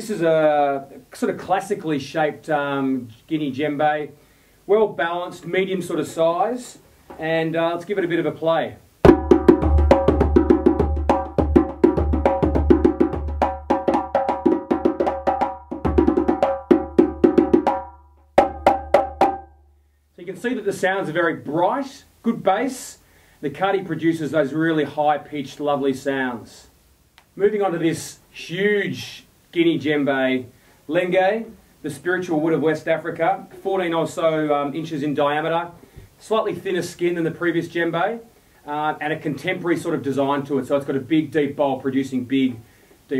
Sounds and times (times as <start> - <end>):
Speech: 0.0 - 8.8, 20.2 - 26.8, 27.4 - 43.1
Music: 9.1 - 19.8.